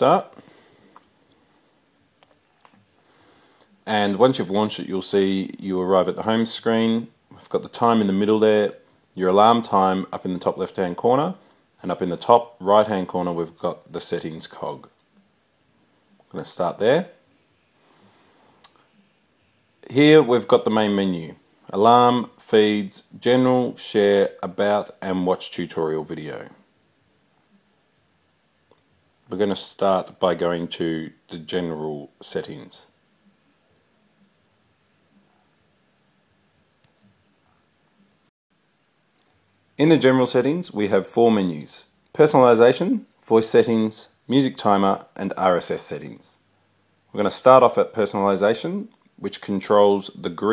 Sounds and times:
Speech: 0:00.0 - 0:00.4, 0:03.8 - 0:15.0, 0:16.3 - 0:17.2, 0:19.8 - 0:26.7, 0:29.3 - 0:33.0, 0:39.8 - 0:46.4, 0:47.1 - 0:50.5.

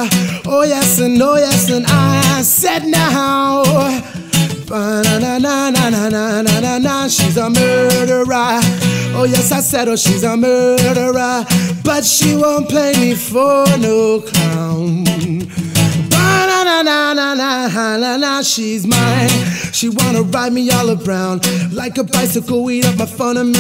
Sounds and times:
Strum: 0:00.0 - 0:16.6
Electric guitar: 0:00.0 - 0:23.6.

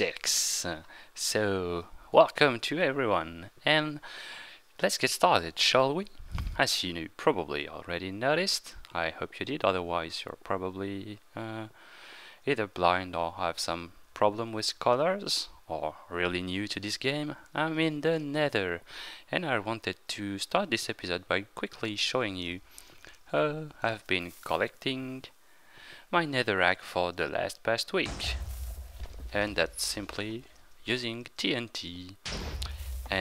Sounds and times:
Speech: 0:00.0 - 0:04.0, 0:04.8 - 0:11.8, 0:12.5 - 0:22.6, 0:23.3 - 0:25.4, 0:26.1 - 0:28.4, 0:29.2 - 0:33.2.

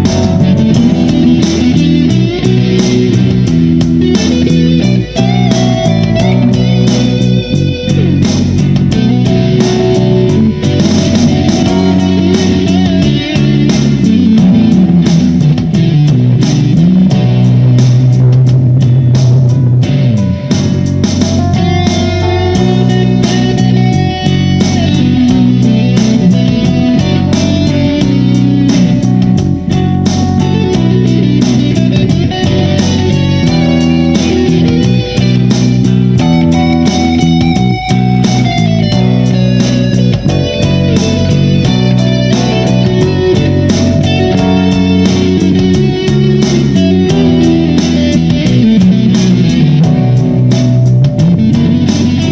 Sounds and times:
Blues: 0:00.0 - 0:52.3.

